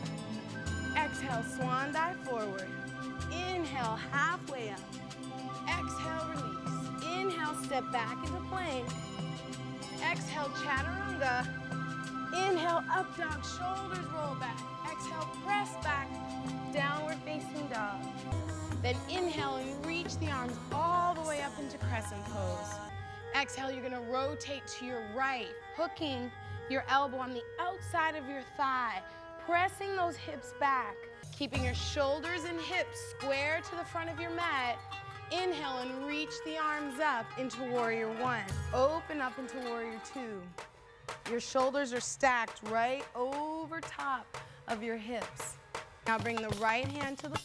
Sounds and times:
Music: 0:00.0 - 0:47.4
Speech: 0:05.7 - 0:08.9, 0:10.0 - 0:11.4, 0:12.4 - 0:16.1, 0:16.7 - 0:18.0, 0:18.8 - 0:40.5, 0:41.3 - 0:47.4.

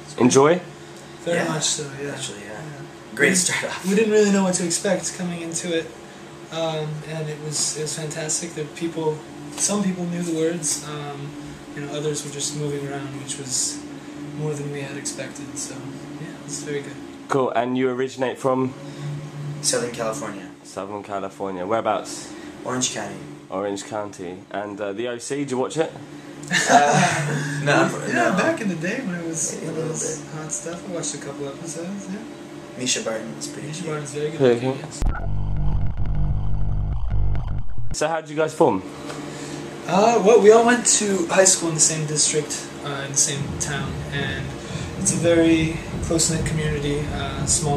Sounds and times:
Speech: 0:00.0 - 0:05.9, 0:06.5 - 0:18.8, 0:19.6 - 0:35.0, 0:38.0 - 0:38.9, 0:39.8 - 0:47.7.

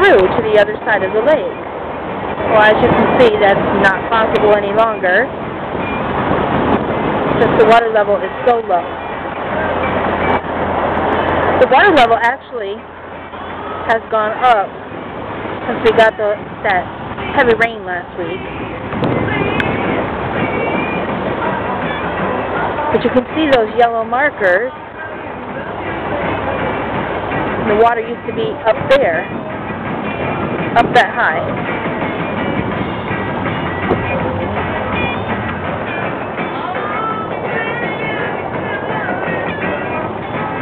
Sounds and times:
Speech: 0:00.0 - 0:01.6, 0:02.5 - 0:05.3, 0:07.4 - 0:08.9, 0:11.6 - 0:12.8, 0:13.8 - 0:14.7, 0:15.7 - 0:18.4, 0:22.9 - 0:24.8, 0:27.7 - 0:29.3, 0:30.8 - 0:31.5
Music: 0:05.8 - 0:40.6.

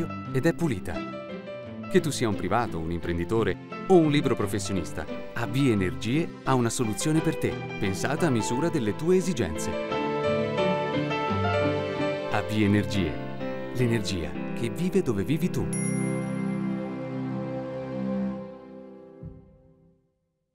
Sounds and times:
Speech: 0:00.0 - 0:01.0, 0:01.9 - 0:09.8, 0:12.3 - 0:13.2, 0:13.8 - 0:15.8
Music: 0:00.0 - 0:20.5.

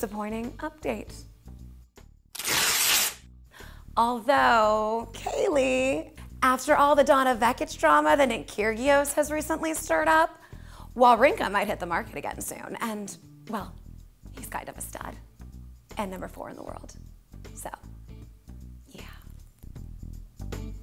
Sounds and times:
Female speech, woman speaking: 0:00.0 - 0:01.2, 0:04.0 - 0:10.3, 0:11.0 - 0:13.8, 0:14.4 - 0:15.2, 0:16.0 - 0:17.0, 0:17.6 - 0:17.8
Music: 0:00.0 - 0:20.8.

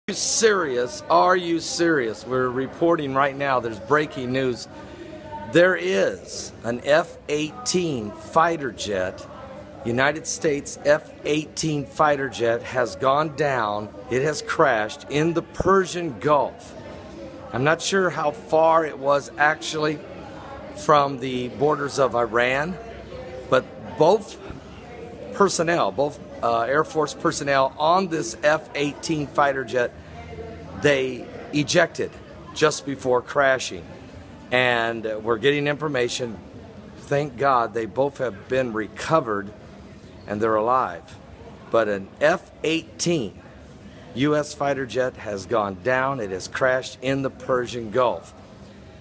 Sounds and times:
Speech: 0:00.0 - 0:49.0.

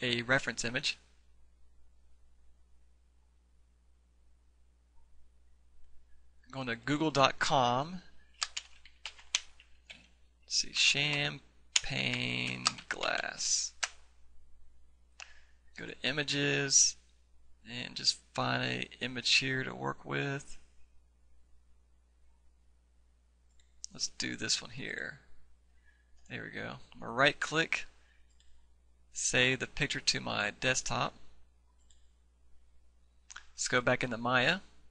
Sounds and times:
Speech: 0:00.0 - 0:01.1, 0:06.5 - 0:08.1, 0:10.5 - 0:13.8, 0:15.8 - 0:17.0, 0:17.6 - 0:20.7, 0:23.9 - 0:25.3, 0:26.3 - 0:28.0, 0:29.2 - 0:31.4, 0:33.4 - 0:34.8.

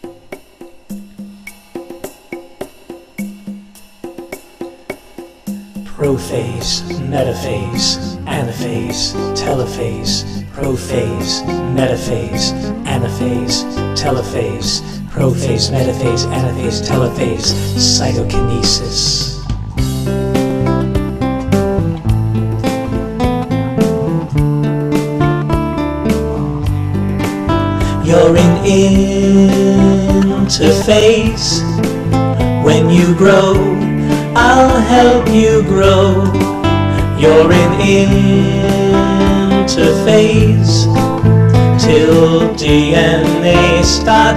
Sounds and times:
Music: 0:00.0 - 0:44.3.

